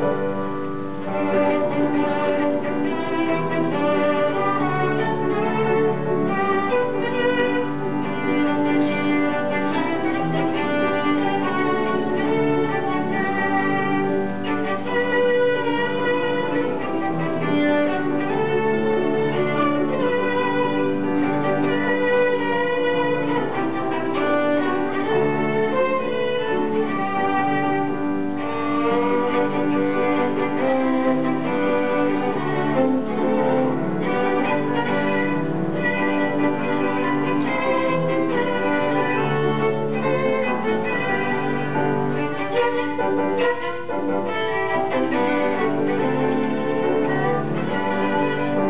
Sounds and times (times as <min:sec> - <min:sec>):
Violin, fiddle: 0:00.0 - 0:48.6.